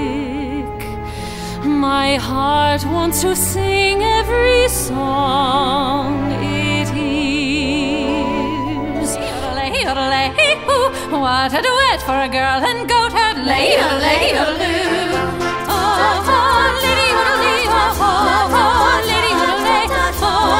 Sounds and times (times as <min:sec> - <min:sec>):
Tender music: 0:00.0 - 0:20.5.